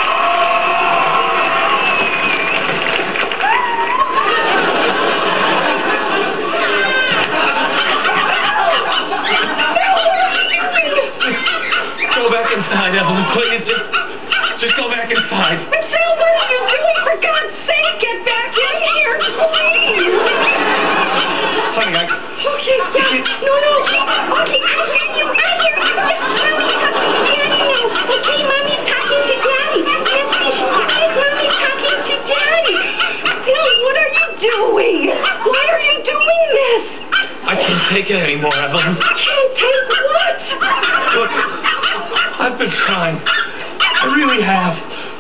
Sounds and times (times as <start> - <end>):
Bow-wow: 37.1 - 44.4.